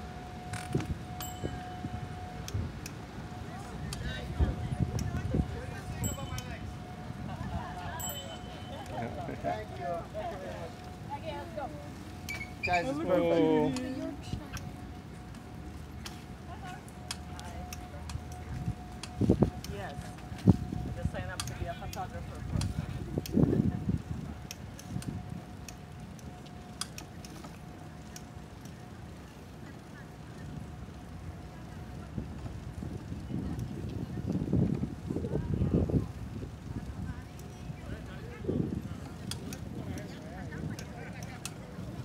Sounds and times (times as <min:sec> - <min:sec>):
Vehicle: 0:00.0 - 0:42.0.